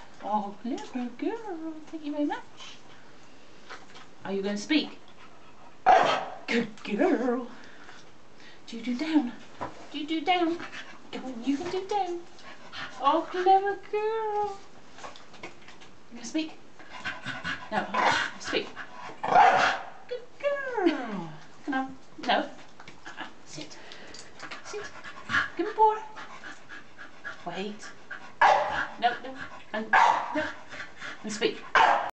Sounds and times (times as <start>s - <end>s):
Speech: 0.2s - 2.5s, 4.2s - 5.0s, 6.5s - 7.6s, 8.7s - 12.3s, 13.0s - 14.6s, 16.1s - 16.6s, 17.7s - 18.8s, 20.1s - 22.6s, 25.6s - 26.2s, 27.4s - 27.9s, 29.0s - 30.6s, 31.2s - 31.7s
Bow-wow: 5.9s - 6.4s, 19.3s - 19.9s, 28.4s - 28.8s, 31.8s - 32.1s
Yip: 5.9s - 6.4s, 19.3s - 19.9s, 28.4s - 28.8s, 30.0s - 30.4s, 31.8s - 32.1s.